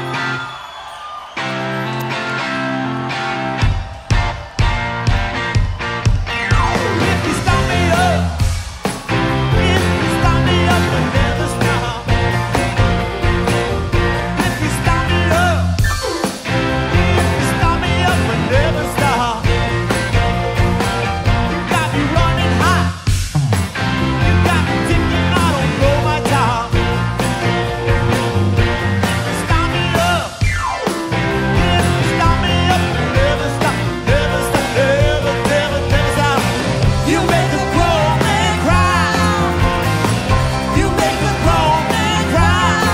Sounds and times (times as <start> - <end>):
Music: 0.0 - 42.9.